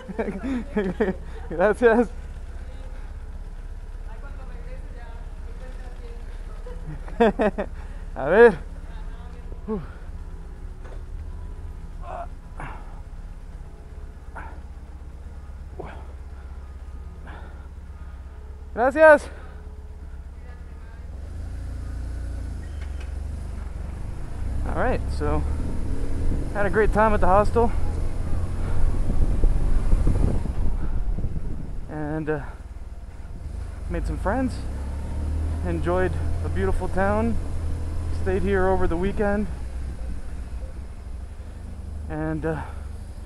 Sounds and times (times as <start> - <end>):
Motorcycle: 0.0 - 43.2
Speech: 26.6 - 27.7, 33.9 - 34.6, 35.6 - 37.4, 38.2 - 39.5.